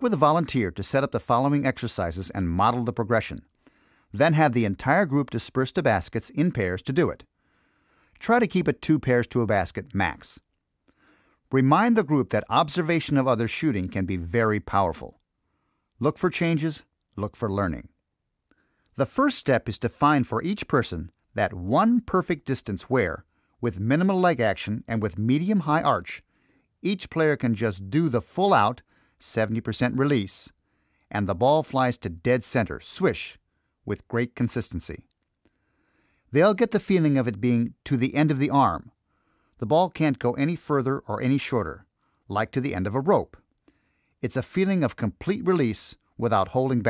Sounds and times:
Speech: 0.0 - 3.5, 4.1 - 7.3, 8.2 - 10.4, 11.5 - 15.2, 16.0 - 18.0, 19.0 - 26.2, 26.8 - 35.1, 36.3 - 39.0, 39.6 - 43.4, 44.2 - 46.8.

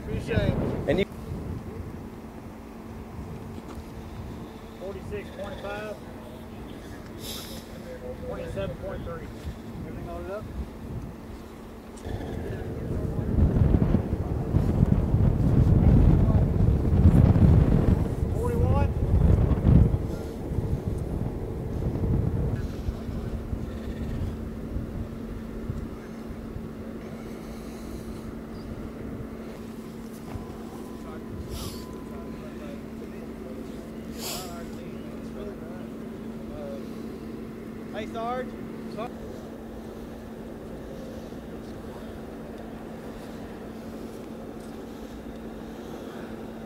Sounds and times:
Speech: 0.0 - 1.1, 4.8 - 6.9, 7.8 - 10.5, 18.3 - 19.0, 31.0 - 36.9, 37.9 - 39.2
Wind noise (microphone): 0.0 - 2.1, 8.3 - 11.2, 12.0 - 26.8
Outside, rural or natural: 0.0 - 46.6.

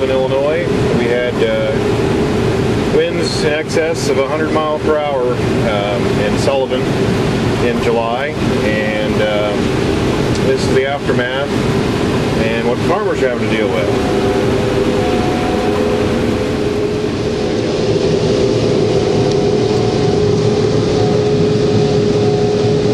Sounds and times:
Speech: 0.0 - 1.8, 2.9 - 6.9, 7.6 - 9.6, 10.4 - 11.5, 12.4 - 14.0
Outside, rural or natural: 0.0 - 22.9
Vehicle: 0.0 - 22.9.

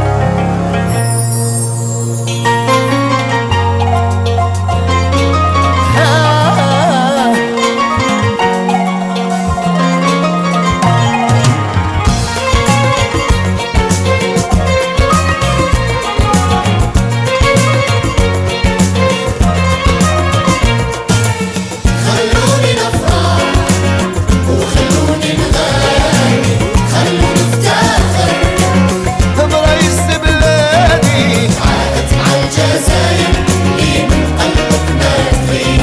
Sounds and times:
Music: 0.0 - 35.8.

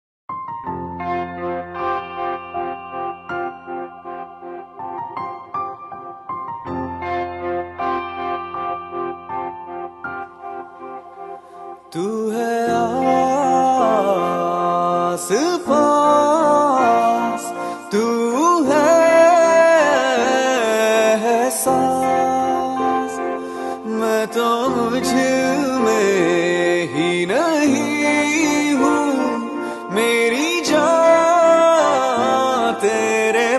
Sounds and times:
Music: 0.3 - 33.5.

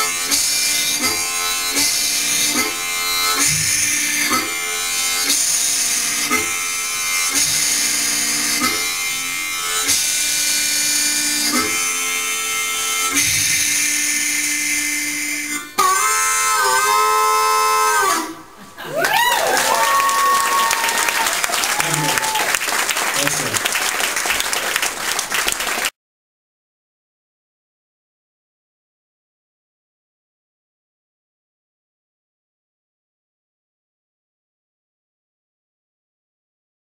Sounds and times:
Harmonica: 0.0 - 18.9
Wind instrument, woodwind instrument: 0.0 - 22.6.

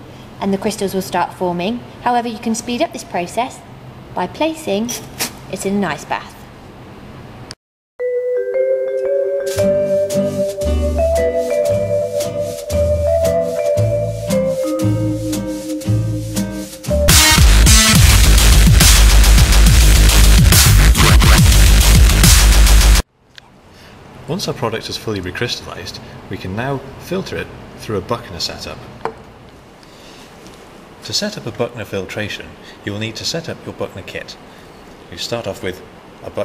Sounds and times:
Speech: 0.4 - 6.5, 24.3 - 28.9, 31.0 - 34.4, 35.1 - 36.4
Music: 8.0 - 23.0.

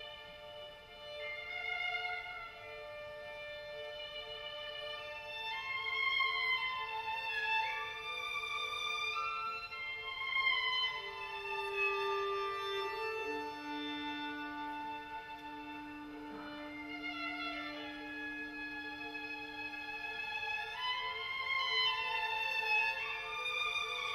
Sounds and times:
Violin, fiddle: 0.0 - 24.1.

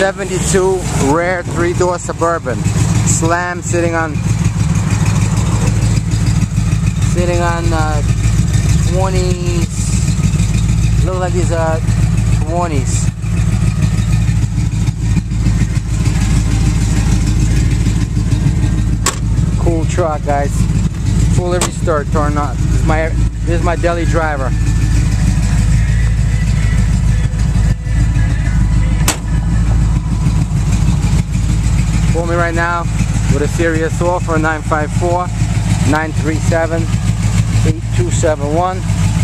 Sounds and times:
Speech: 0.0 - 4.2, 7.1 - 8.1, 8.9 - 10.0, 11.0 - 11.8, 12.4 - 13.1, 19.6 - 20.6, 21.3 - 24.5, 32.1 - 36.9, 37.6 - 38.8
Vehicle: 0.0 - 39.2.

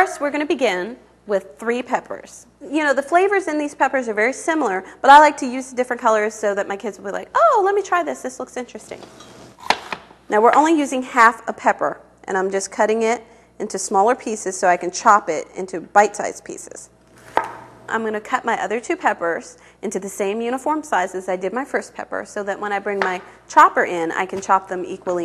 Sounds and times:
Speech: 0.0 - 9.1, 10.3 - 16.9, 17.9 - 25.2.

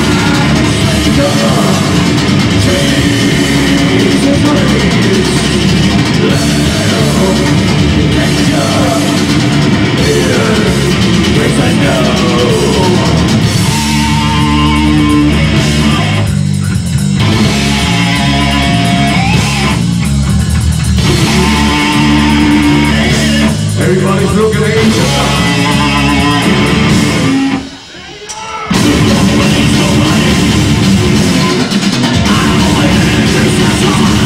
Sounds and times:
Drum: 0.0 - 34.2
Heavy metal: 0.0 - 34.2.

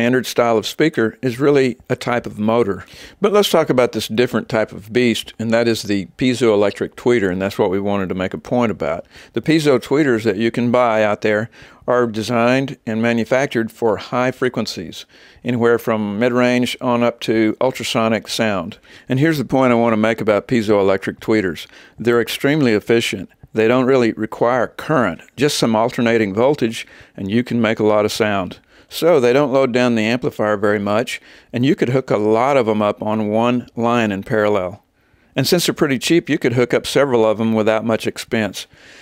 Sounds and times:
Speech: 0.0 - 38.8.

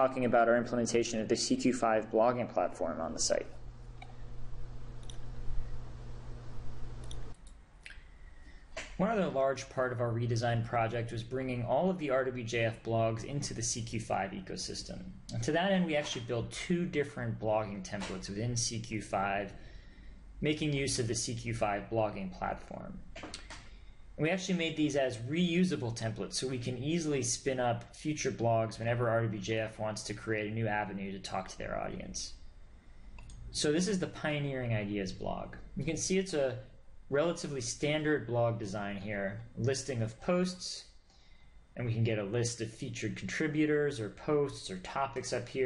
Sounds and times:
Speech: 0.0 - 3.6, 9.0 - 19.6, 20.4 - 23.1, 24.2 - 32.4, 33.5 - 40.9, 41.8 - 45.6.

